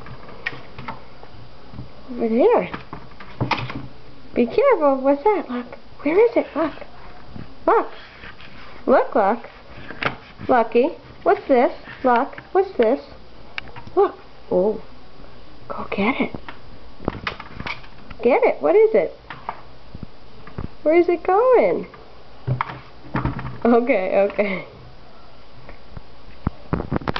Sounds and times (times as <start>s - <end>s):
Speech: 2.1s - 2.8s, 4.4s - 6.9s, 8.8s - 9.5s, 10.5s - 13.2s, 14.0s - 14.9s, 18.2s - 19.2s, 20.8s - 21.9s, 23.6s - 24.7s.